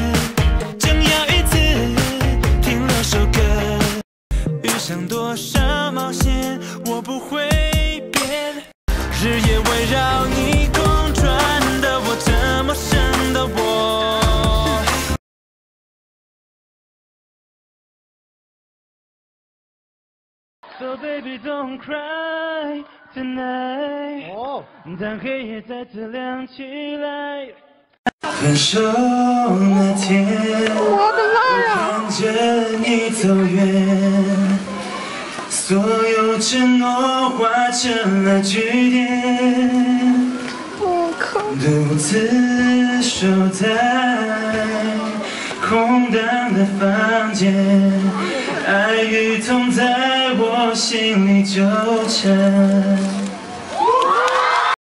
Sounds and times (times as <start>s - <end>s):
Male singing: 0.0s - 15.2s, 20.7s - 34.7s, 35.5s - 53.4s
Music: 0.0s - 15.2s.